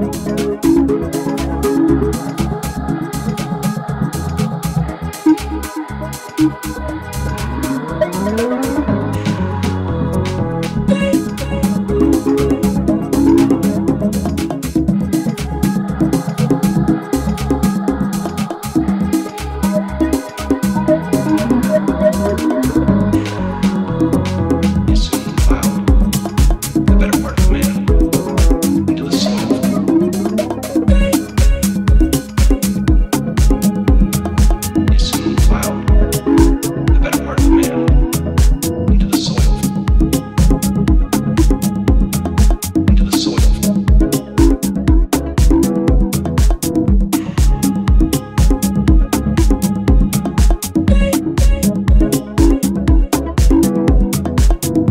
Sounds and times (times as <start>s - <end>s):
House music: 0.0s - 54.9s.